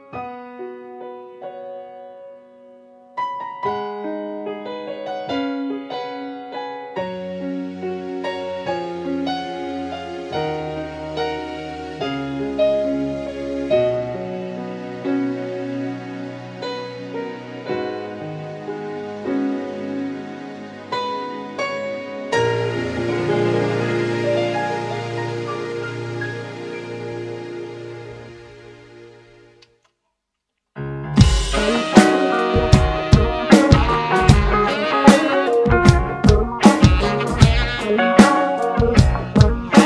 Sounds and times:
Electric guitar: 0:08.4 - 0:28.8, 0:31.2 - 0:39.8
Bass drum: 0:31.2 - 0:34.9, 0:35.7 - 0:39.8
Drum kit: 0:31.2 - 0:39.8.

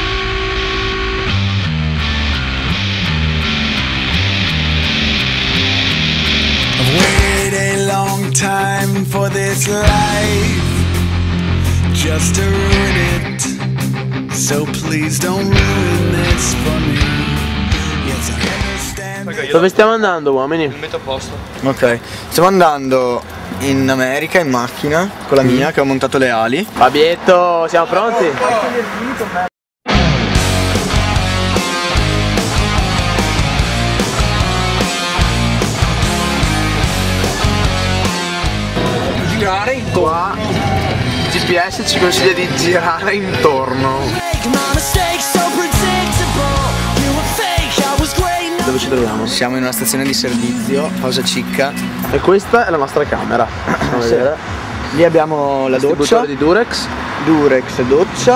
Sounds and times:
Music: 0:00.0 - 0:19.6, 0:29.9 - 0:39.8, 0:43.7 - 0:52.7
Speech: 0:19.2 - 0:29.5, 0:39.1 - 0:44.2, 0:48.6 - 0:58.3.

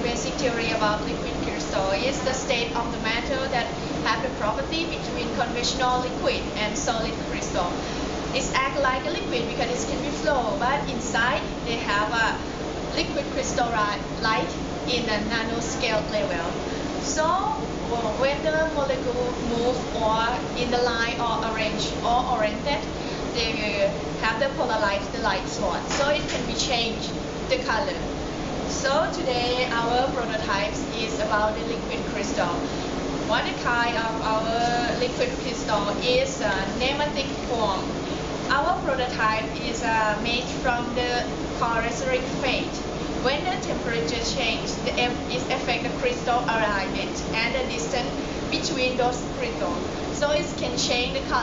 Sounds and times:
Speech: 0:00.0 - 0:07.8, 0:08.4 - 0:12.4, 0:13.0 - 0:28.1, 0:28.7 - 0:32.7, 0:33.3 - 0:37.9, 0:38.5 - 0:51.4.

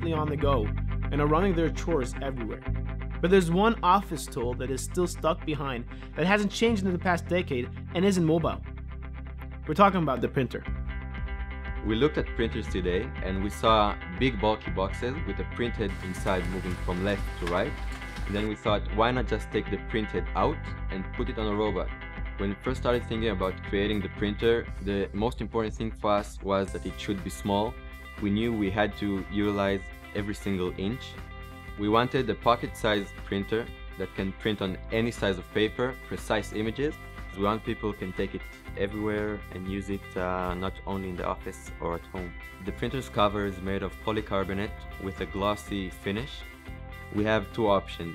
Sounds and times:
Speech: 0:00.0 - 0:02.6, 0:03.2 - 0:08.6, 0:09.7 - 0:10.7, 0:11.8 - 0:31.2, 0:31.8 - 0:46.5, 0:47.1 - 0:48.1
Music: 0:00.0 - 0:48.1.

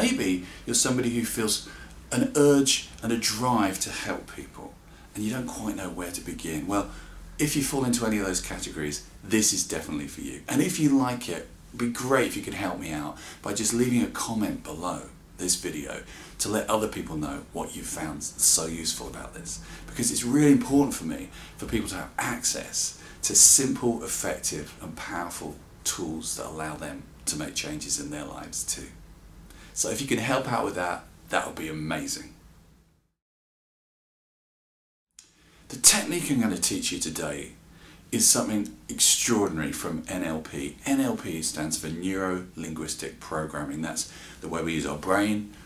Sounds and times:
Speech: 0:00.0 - 0:29.0, 0:29.8 - 0:32.4, 0:35.7 - 0:45.6.

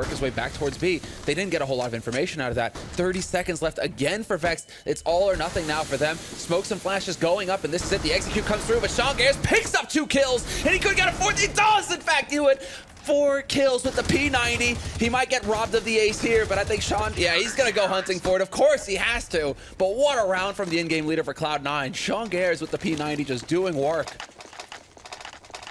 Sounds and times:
Speech: 0:00.0 - 0:24.2.

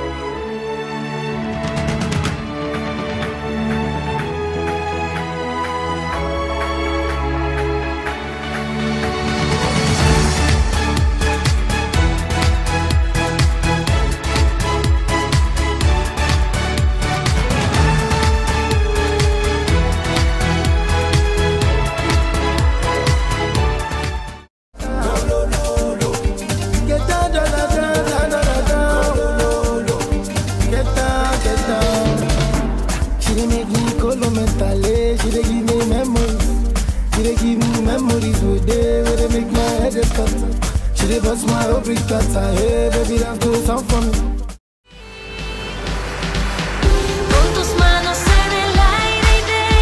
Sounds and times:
Music: 0:00.0 - 0:49.8.

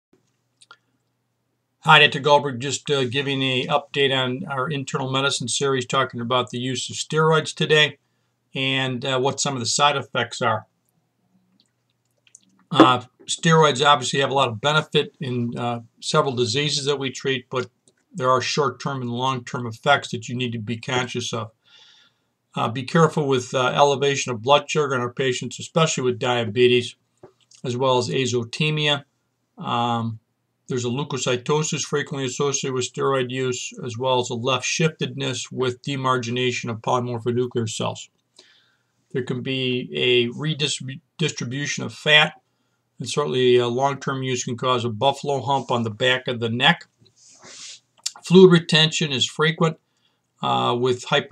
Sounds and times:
Speech: 0:01.8 - 0:10.7, 0:12.7 - 0:21.6, 0:22.6 - 0:38.2, 0:39.1 - 0:42.4, 0:43.0 - 0:49.8, 0:50.4 - 0:51.3.

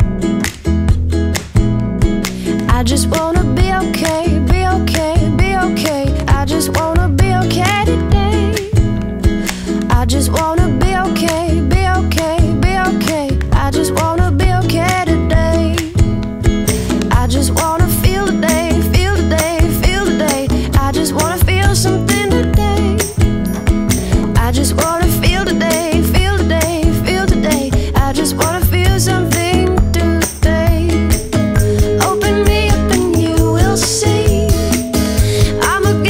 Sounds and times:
Pop music: 0:00.0 - 0:36.0.

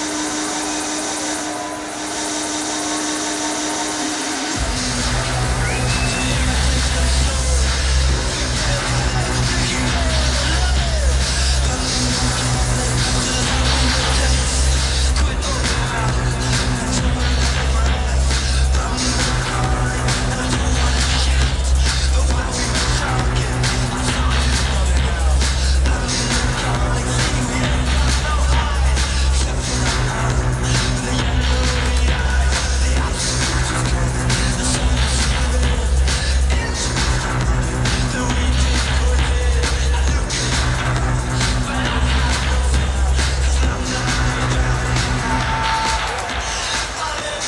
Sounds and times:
Techno: 0:00.0 - 0:47.4.

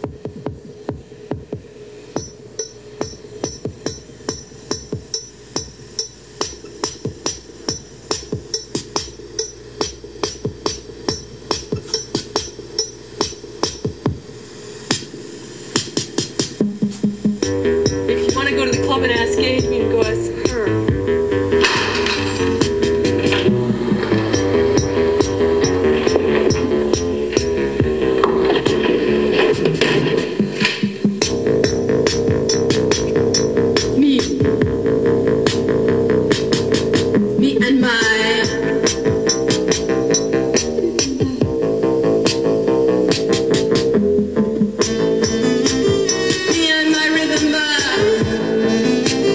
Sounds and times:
Music: 0:00.0 - 0:49.3
Speech: 0:18.1 - 0:20.9, 0:34.0 - 0:34.4, 0:37.4 - 0:38.4.

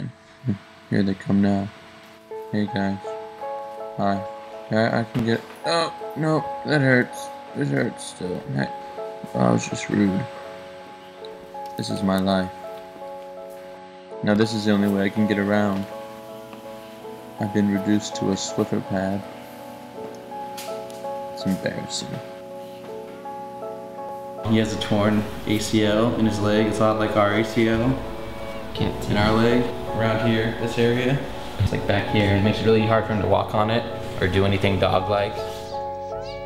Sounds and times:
Speech: 0:00.0 - 0:01.8, 0:02.5 - 0:03.1, 0:04.0 - 0:10.3, 0:11.8 - 0:12.6, 0:14.2 - 0:15.9, 0:17.4 - 0:19.2, 0:21.4 - 0:22.3, 0:24.5 - 0:28.0, 0:28.8 - 0:36.4
Music: 0:00.0 - 0:36.4.

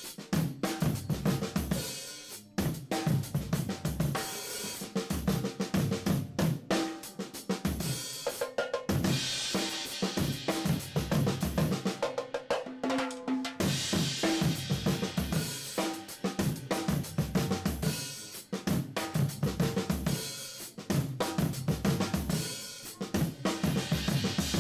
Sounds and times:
Hi-hat: 0:00.0 - 0:06.1, 0:09.0 - 0:12.0, 0:13.6 - 0:24.6.

